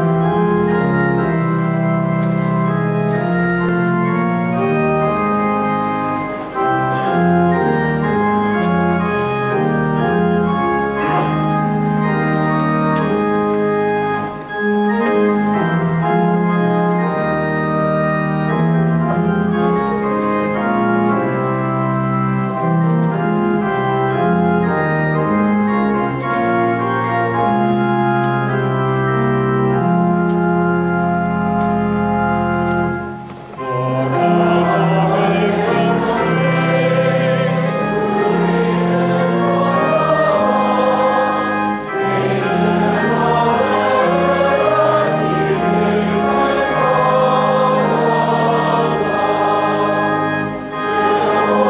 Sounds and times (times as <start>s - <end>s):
Piano: 0.0s - 51.6s.